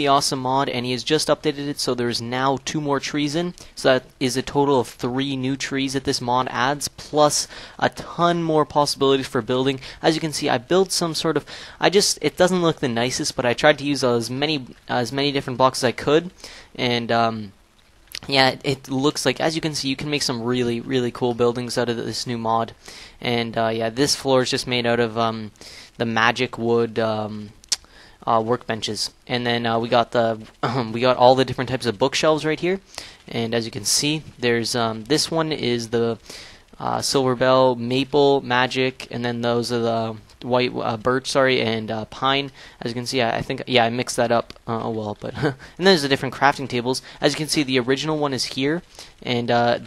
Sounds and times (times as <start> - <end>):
Speech: 0.0 - 17.6, 18.2 - 49.8.